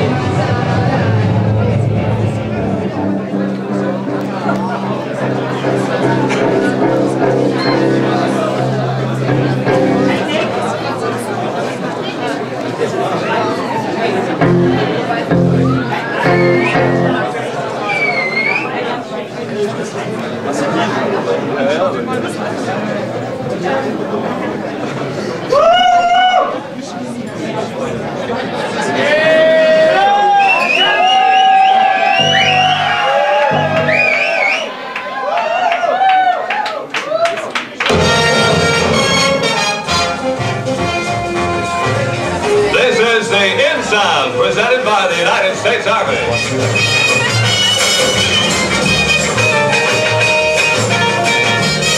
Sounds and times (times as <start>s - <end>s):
Music: 0.0s - 11.0s, 14.2s - 18.6s, 32.1s - 34.6s, 37.8s - 51.9s
Speech: 0.0s - 31.0s, 41.6s - 46.5s.